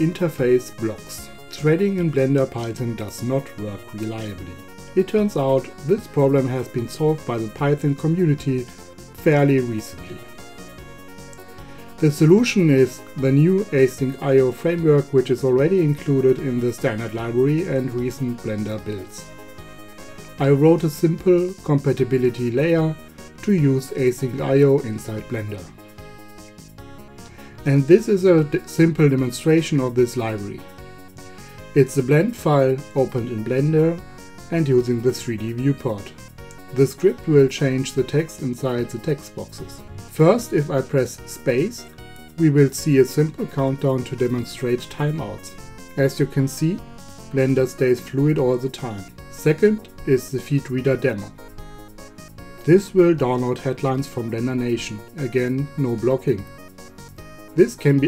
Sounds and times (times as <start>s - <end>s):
Speech: 0.0s - 10.3s, 12.0s - 19.3s, 20.4s - 25.8s, 27.6s - 30.7s, 31.8s - 51.3s, 52.7s - 56.5s, 57.6s - 58.0s
Music: 0.0s - 58.0s.